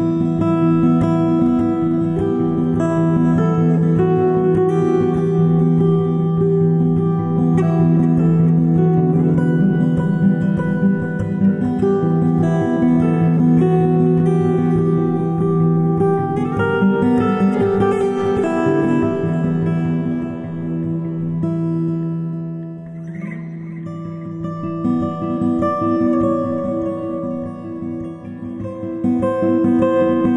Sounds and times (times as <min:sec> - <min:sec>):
Acoustic guitar: 0:00.0 - 0:30.3.